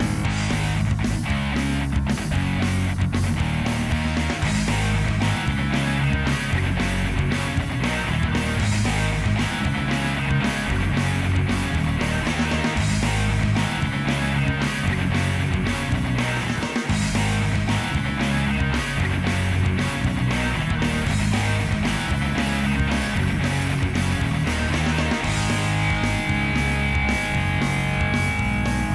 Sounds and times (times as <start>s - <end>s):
Electric guitar: 0.0s - 28.9s.